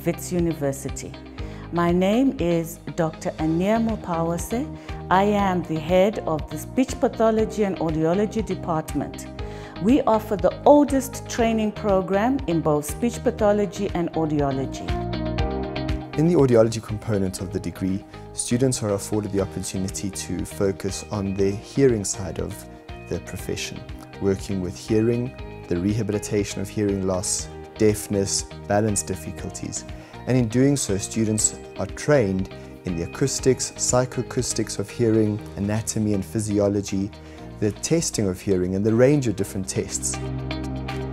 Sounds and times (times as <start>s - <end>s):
Music: 0.0s - 41.1s
Narration, monologue: 0.0s - 41.1s
Male speech, man speaking: 16.2s - 40.2s.